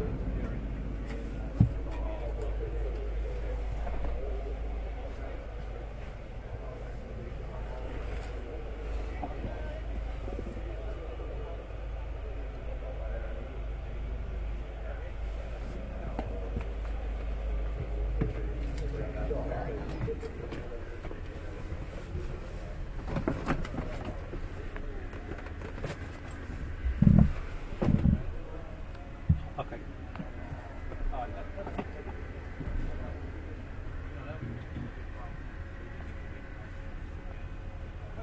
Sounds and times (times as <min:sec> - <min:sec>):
Speech: 0:00.0 - 0:38.2.